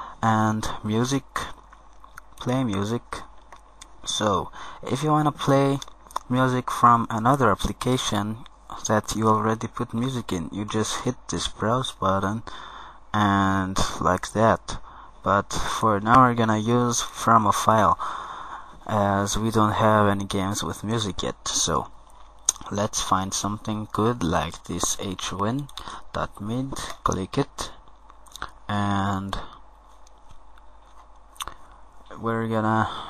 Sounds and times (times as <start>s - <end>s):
Speech: 0.2s - 1.6s, 2.3s - 3.3s, 3.9s - 12.5s, 13.1s - 18.0s, 18.8s - 21.9s, 22.5s - 27.8s, 28.4s - 29.6s, 32.1s - 33.0s.